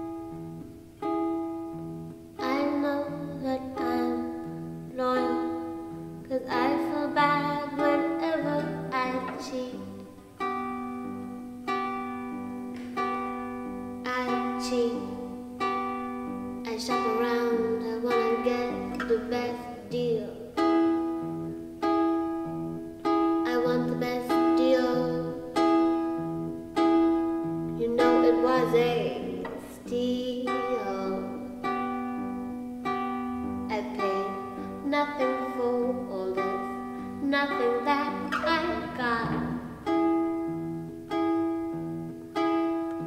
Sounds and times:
Music: 0.0s - 43.0s.

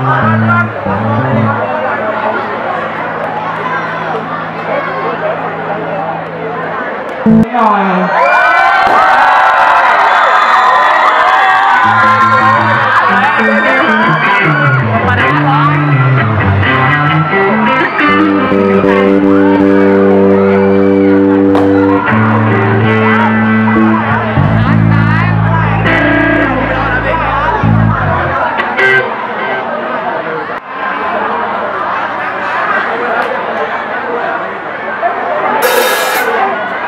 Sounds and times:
Music: 0.0s - 1.8s, 11.8s - 29.1s
Speech: 3.7s - 8.2s, 14.8s - 16.0s, 24.1s - 35.6s.

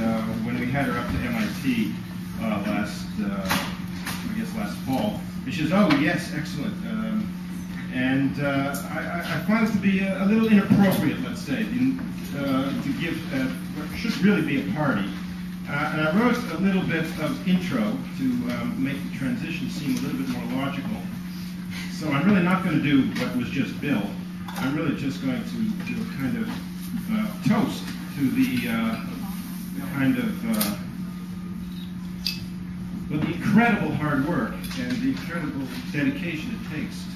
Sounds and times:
Speech: 0.0s - 7.3s, 7.9s - 21.2s, 21.9s - 30.9s, 33.1s - 37.1s.

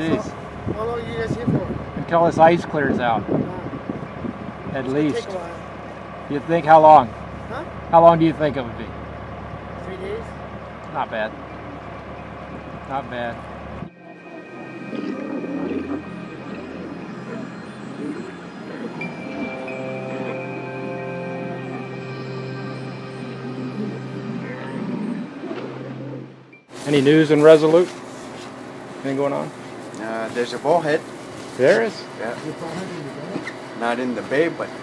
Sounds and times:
Music: 13.9s - 26.6s.

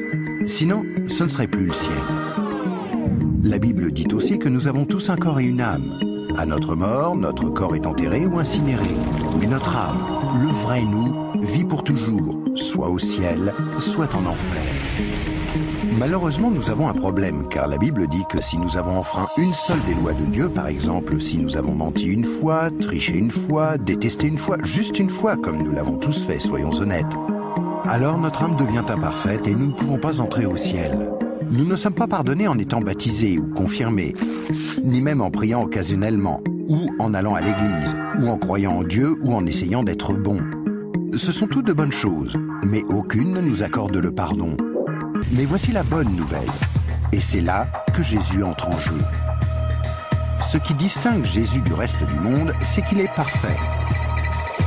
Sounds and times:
Music: 0.0s - 54.6s
Speech: 0.5s - 2.1s, 3.4s - 14.8s, 15.9s - 27.2s, 27.9s - 44.6s, 45.2s - 49.1s, 50.4s - 53.6s.

